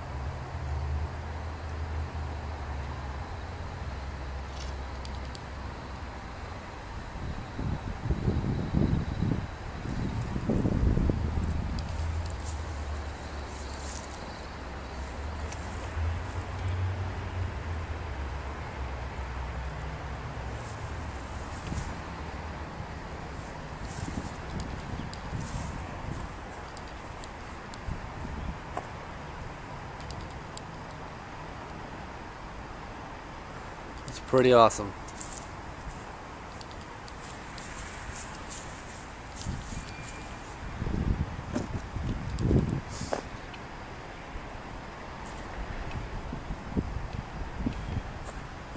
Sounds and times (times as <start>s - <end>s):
Outside, rural or natural: 0.0s - 48.7s.